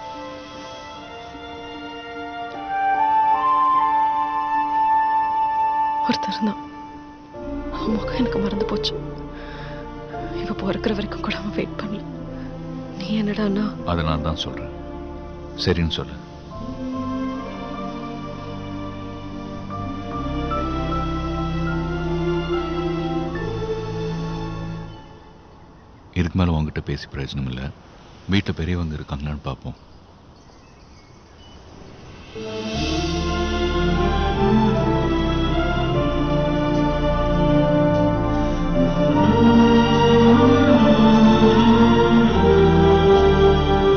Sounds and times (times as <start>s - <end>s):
Music: 0.0s - 25.8s, 31.7s - 43.9s
Speech: 26.2s - 29.8s.